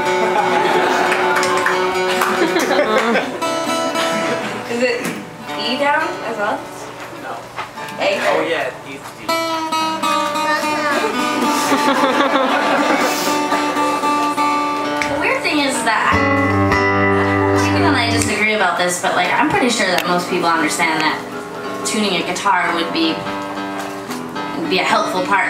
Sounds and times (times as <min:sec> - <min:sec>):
Acoustic guitar: 0:00.0 - 0:08.4, 0:09.0 - 0:25.4.